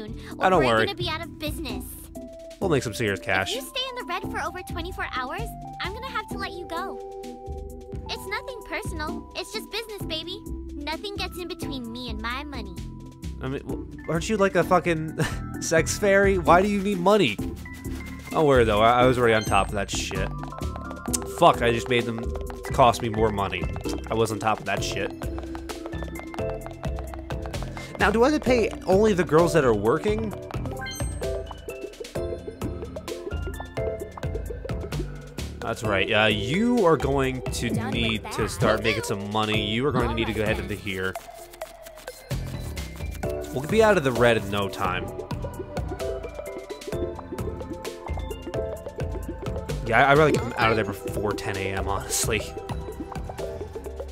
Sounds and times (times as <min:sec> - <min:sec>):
Speech: 0:00.0 - 0:02.0, 0:02.6 - 0:07.0, 0:08.1 - 0:12.7, 0:13.4 - 0:17.4, 0:18.4 - 0:20.3, 0:21.2 - 0:25.1, 0:28.0 - 0:30.3, 0:35.6 - 0:41.2, 0:43.5 - 0:45.1, 0:49.9 - 0:52.5
Music: 0:00.0 - 0:54.1.